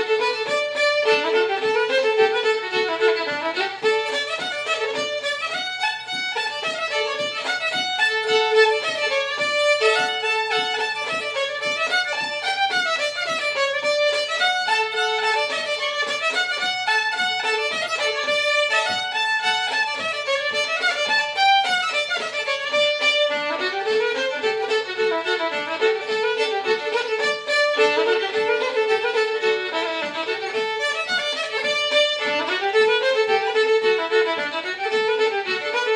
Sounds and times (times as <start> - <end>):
Violin, fiddle: 0.0 - 35.9.